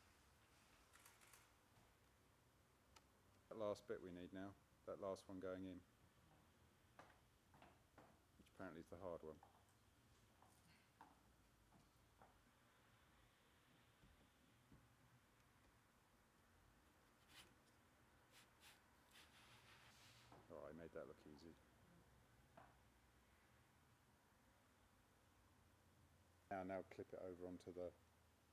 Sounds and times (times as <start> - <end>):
Inside, small room: 0.0 - 28.5
Speech: 3.5 - 5.8, 8.5 - 9.4, 20.5 - 21.6, 26.5 - 28.0
Silence: 9.8 - 20.6, 21.4 - 26.5.